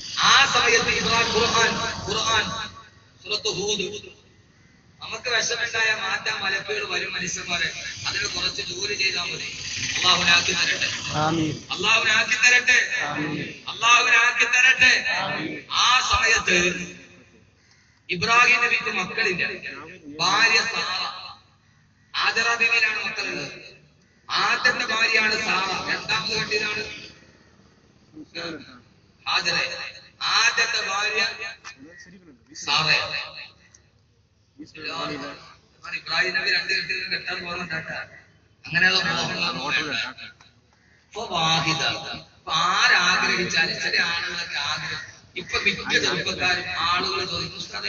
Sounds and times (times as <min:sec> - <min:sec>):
Narration, monologue: 0:00.0 - 0:47.8
Male speech, man speaking: 0:00.2 - 0:04.1, 0:05.0 - 0:17.1, 0:18.1 - 0:21.2, 0:22.2 - 0:27.1, 0:28.2 - 0:33.4, 0:34.6 - 0:40.4, 0:41.2 - 0:47.8.